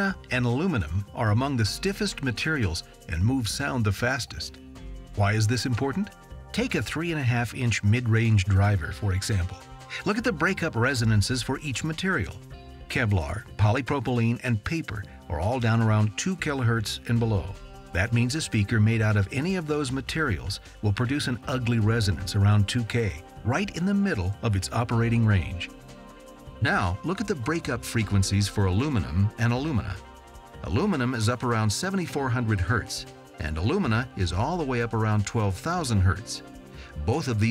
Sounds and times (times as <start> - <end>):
Speech: 0.0 - 4.6, 5.2 - 25.7, 26.6 - 37.5
Music: 0.0 - 37.5.